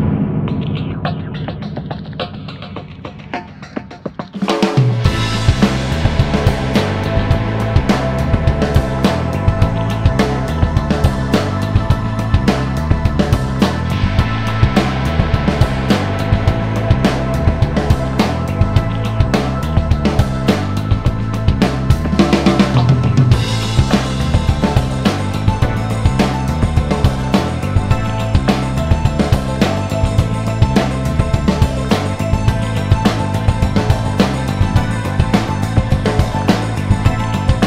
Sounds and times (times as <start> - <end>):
Music: 0.0 - 37.6.